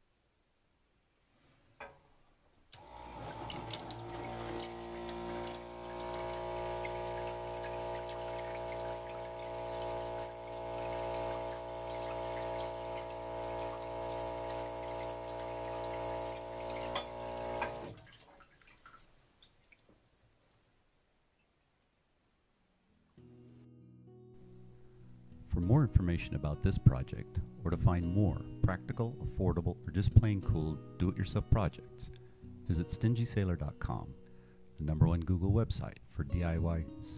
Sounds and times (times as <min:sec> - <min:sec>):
Music: 0:22.9 - 0:37.1
Speech: 0:25.5 - 0:34.2, 0:34.8 - 0:37.1.